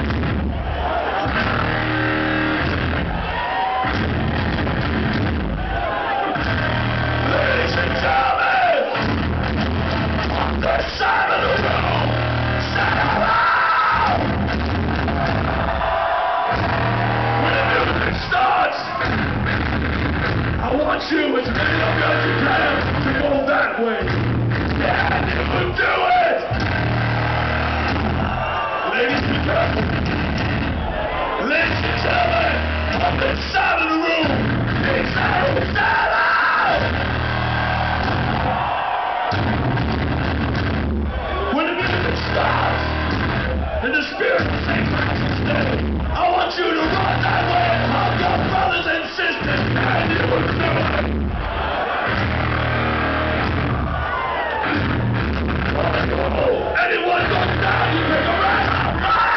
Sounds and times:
Music: 0.0 - 36.1, 36.7 - 59.3.

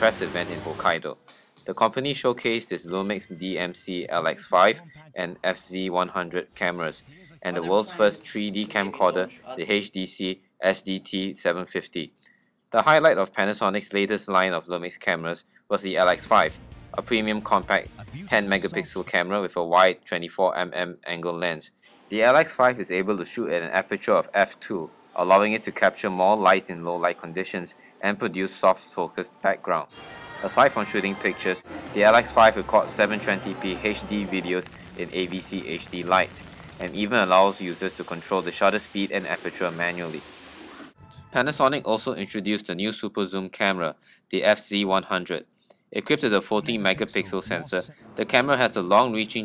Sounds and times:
Speech: 0.0 - 12.1, 12.8 - 40.2, 41.2 - 45.4, 46.0 - 49.4.

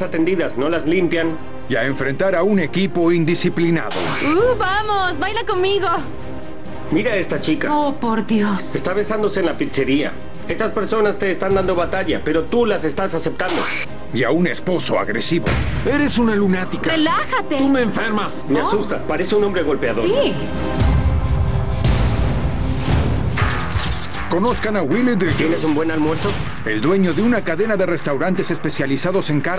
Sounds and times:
Music: 0.0 - 29.5.

